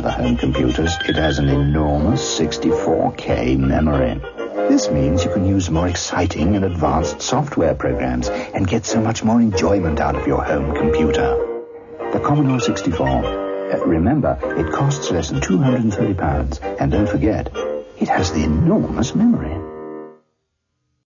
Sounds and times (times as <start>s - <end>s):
Speech: 0.0s - 11.4s, 12.1s - 19.6s
Music: 0.0s - 21.0s.